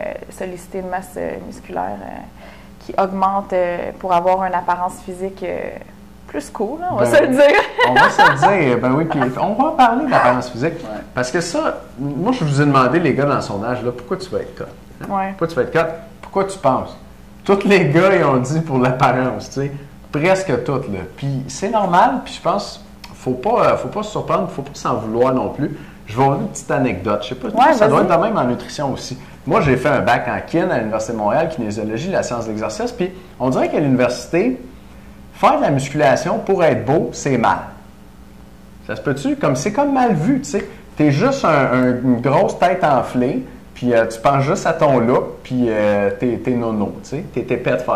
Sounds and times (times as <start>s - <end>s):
Speech: 6.4s - 34.6s, 38.9s - 47.9s.